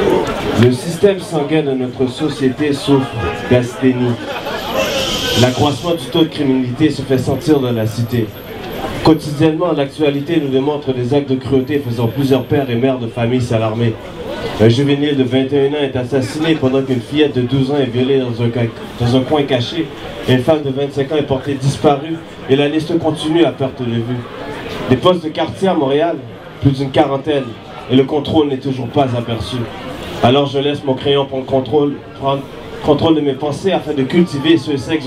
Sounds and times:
Speech: 0.0s - 35.0s.

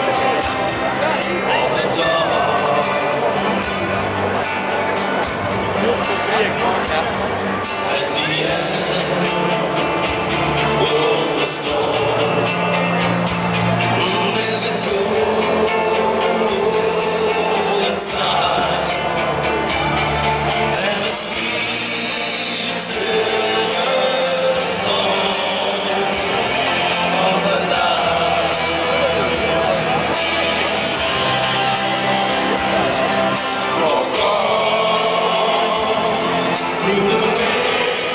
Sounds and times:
Speech: 0.0s - 9.8s, 27.1s - 30.2s
Music: 0.0s - 38.1s.

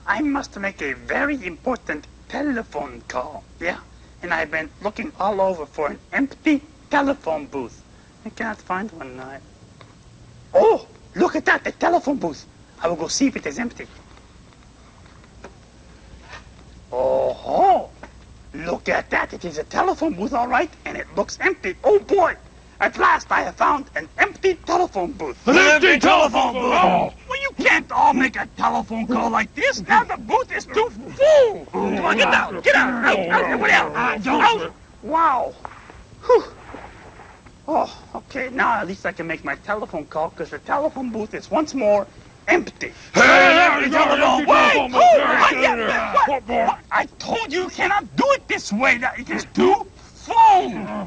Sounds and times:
Speech: 0.0s - 9.5s, 10.6s - 13.9s, 16.9s - 35.6s, 37.7s - 51.0s.

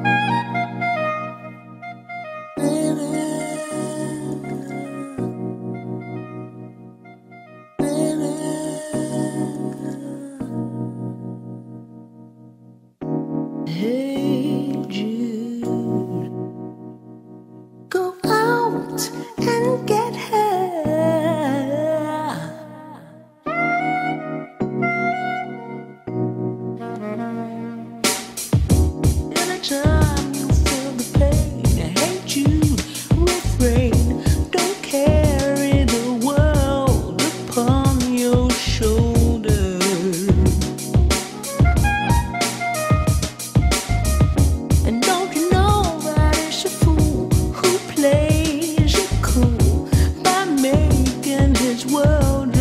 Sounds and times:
Music: 0.0s - 52.6s.

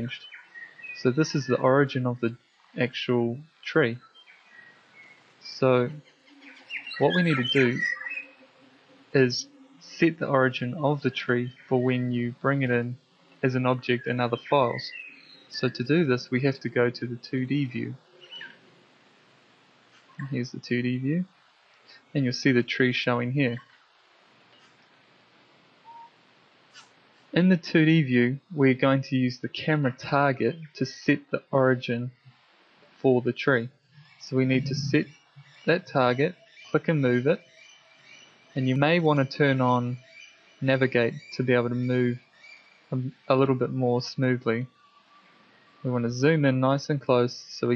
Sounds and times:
Speech: 0.0s - 0.2s, 1.0s - 4.0s, 5.4s - 6.0s, 7.0s - 7.9s, 9.2s - 15.0s, 15.6s - 18.0s, 20.2s - 21.3s, 21.9s - 23.6s, 27.4s - 32.3s, 33.0s - 35.1s, 35.7s - 37.4s, 38.6s - 40.0s, 40.6s - 42.2s, 43.0s - 44.7s, 45.9s - 47.7s
Inside, small room: 0.0s - 37.4s.

